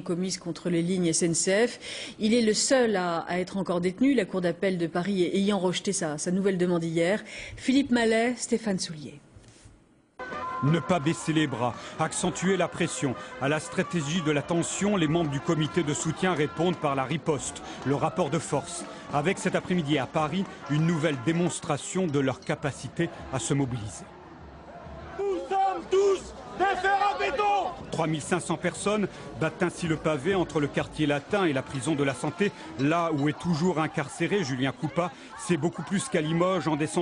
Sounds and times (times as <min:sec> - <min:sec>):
Music: 0:10.2 - 0:36.2.